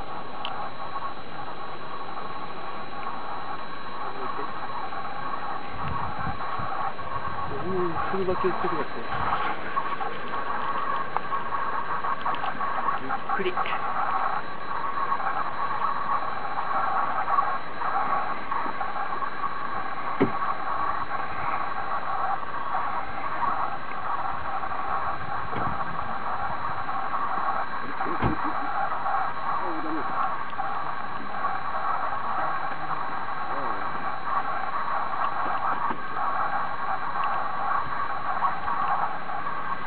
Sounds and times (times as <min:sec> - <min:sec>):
Speech: 0:07.5 - 0:09.2, 0:13.0 - 0:13.9.